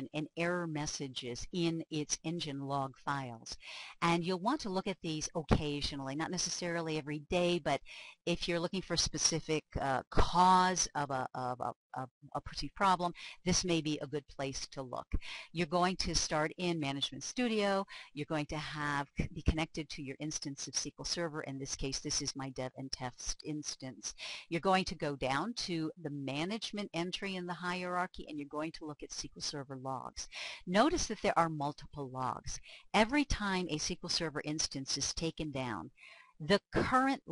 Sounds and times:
Speech: 0:00.0 - 0:37.3.

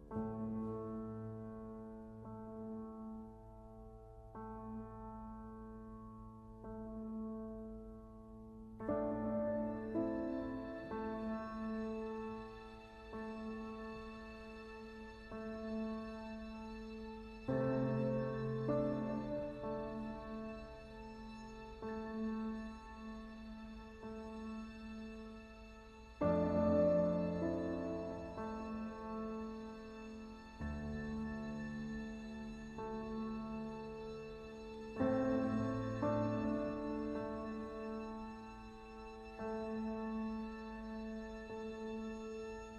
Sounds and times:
Music: 0:00.0 - 0:42.7.

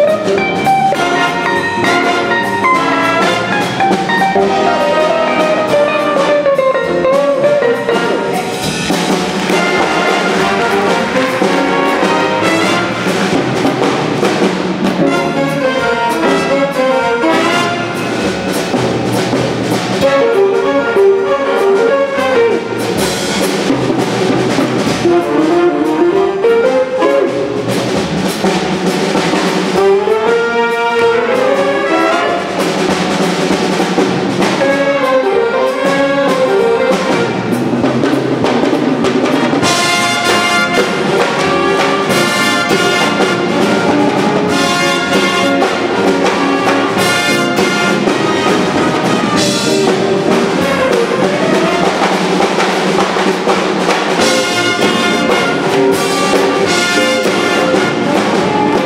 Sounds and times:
Blues: 0:00.0 - 0:58.8
Bowed string instrument: 0:00.0 - 0:58.8
Guitar: 0:00.0 - 0:58.8
Jazz: 0:00.0 - 0:58.8
Orchestra: 0:00.0 - 0:58.8
Piano: 0:00.0 - 0:58.8.

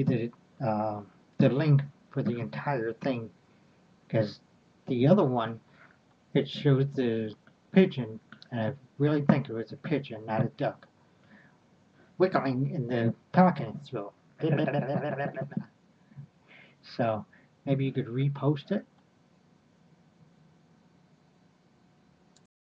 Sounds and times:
Speech: 0:00.0 - 0:03.3, 0:04.1 - 0:05.6, 0:06.4 - 0:10.8, 0:12.2 - 0:15.6, 0:16.9 - 0:18.8.

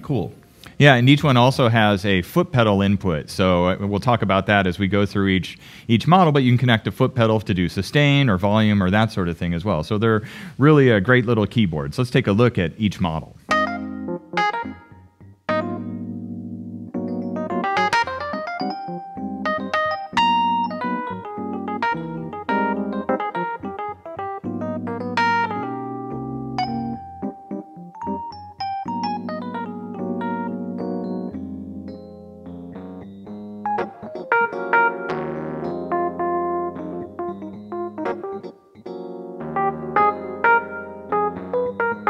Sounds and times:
Electric piano: 0:13.4 - 0:42.1.

